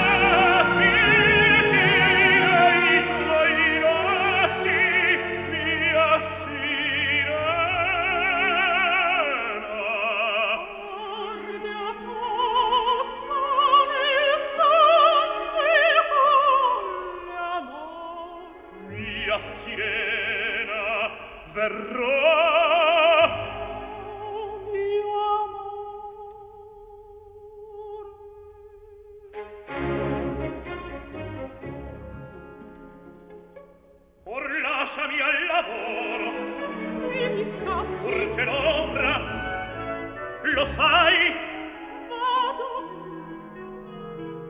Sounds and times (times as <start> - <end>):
Opera: 0.0 - 44.5.